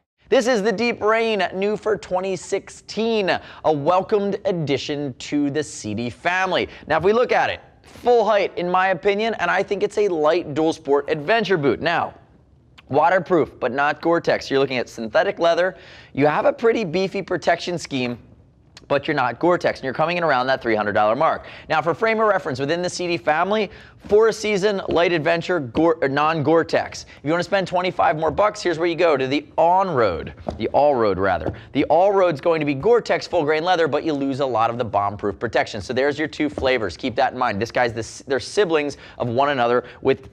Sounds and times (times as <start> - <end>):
Speech: 0.0 - 12.2, 12.8 - 40.3.